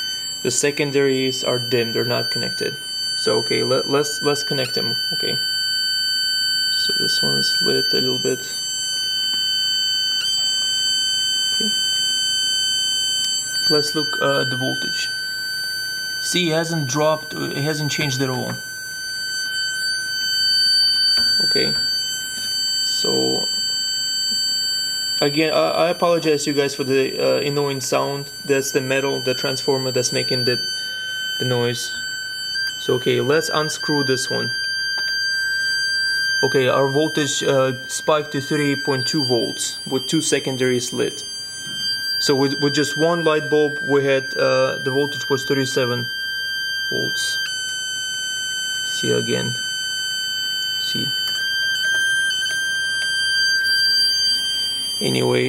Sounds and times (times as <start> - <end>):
Inside, small room: 0.0 - 55.4
Speech: 0.4 - 5.4, 6.9 - 8.6, 13.6 - 15.1, 16.2 - 18.6, 21.3 - 21.8, 23.0 - 23.5, 25.2 - 30.6, 31.4 - 31.9, 32.8 - 34.5, 36.4 - 41.2, 42.2 - 46.1, 46.9 - 47.4, 49.0 - 49.6, 50.9 - 51.1, 55.0 - 55.4.